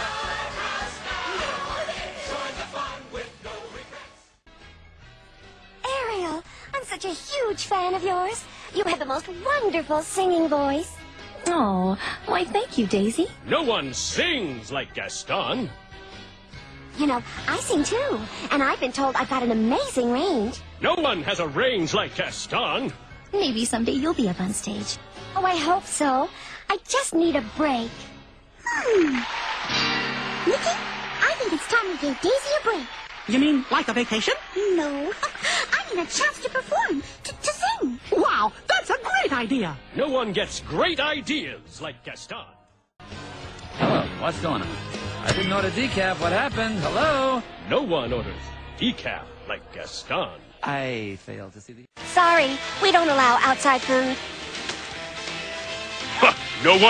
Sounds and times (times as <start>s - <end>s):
Music: 0.0s - 56.8s.